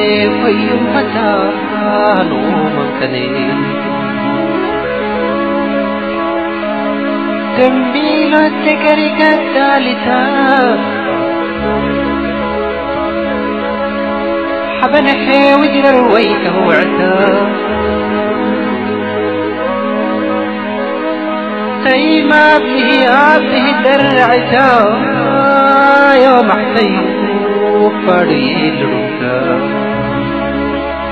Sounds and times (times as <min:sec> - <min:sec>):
Music: 0:00.0 - 0:31.1.